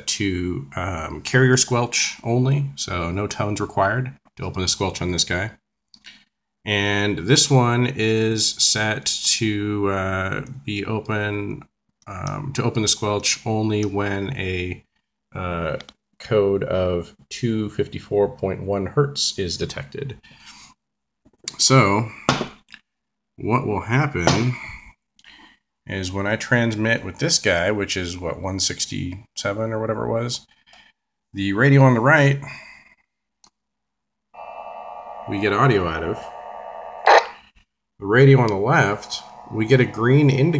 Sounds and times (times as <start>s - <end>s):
Speech: 0.0s - 5.6s, 6.7s - 20.2s, 21.4s - 22.3s, 23.4s - 24.9s, 25.9s - 30.5s, 31.3s - 32.6s, 35.3s - 36.3s, 38.0s - 40.5s.